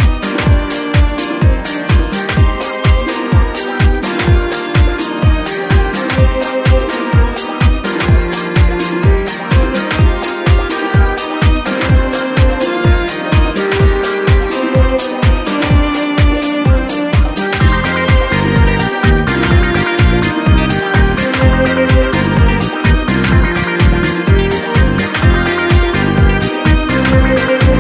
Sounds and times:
Music: 0.0s - 27.8s.

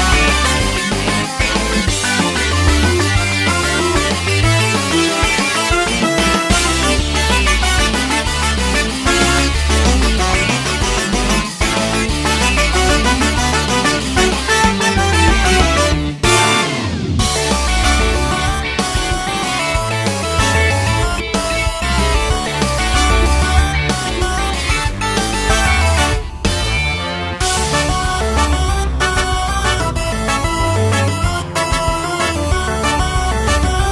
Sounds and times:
Video game music: 0.0s - 33.9s.

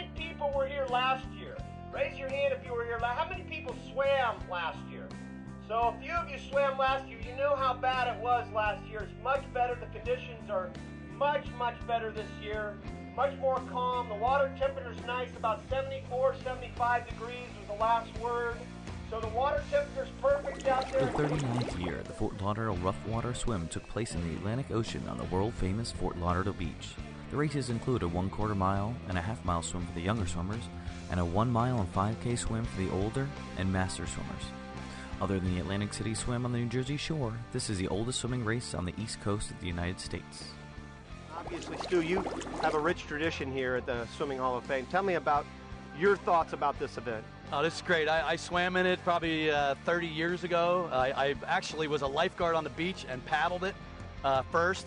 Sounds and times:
Speech: 0.0s - 5.1s, 5.7s - 34.5s, 35.2s - 40.6s, 41.3s - 45.4s, 46.0s - 54.8s
Music: 0.0s - 54.8s
Gurgling: 20.3s - 22.4s, 41.3s - 43.0s.

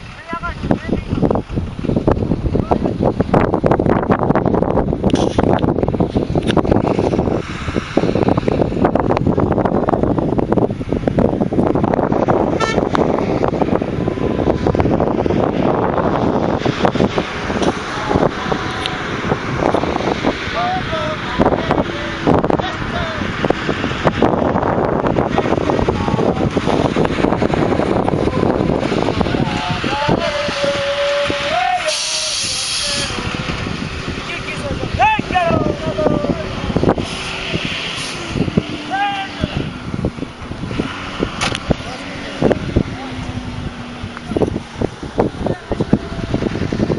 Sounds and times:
Outside, rural or natural: 0.0s - 46.9s
Vehicle: 0.0s - 46.9s
Speech: 0.2s - 1.2s, 20.6s - 23.3s, 34.3s - 36.6s, 38.9s - 39.7s, 45.4s - 46.4s.

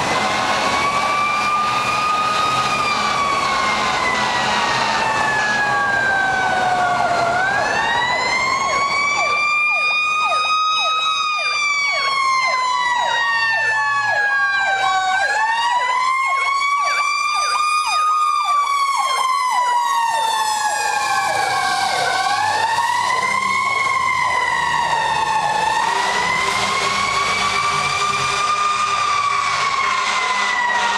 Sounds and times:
Fire engine, fire truck (siren): 0.0s - 30.9s.

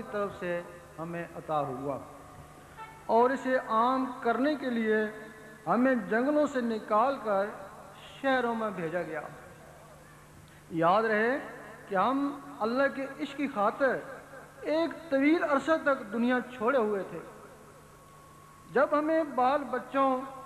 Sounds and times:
Male speech, man speaking: 0.0s - 2.1s, 3.1s - 9.8s, 10.7s - 17.4s, 18.7s - 20.4s
Narration, monologue: 0.0s - 20.4s.

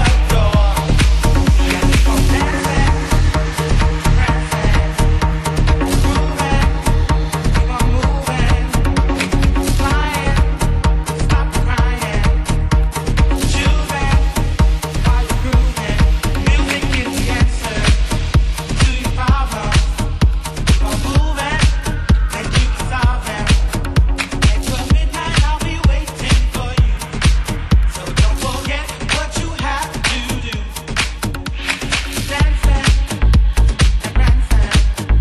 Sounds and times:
Soul music: 0.0s - 35.2s.

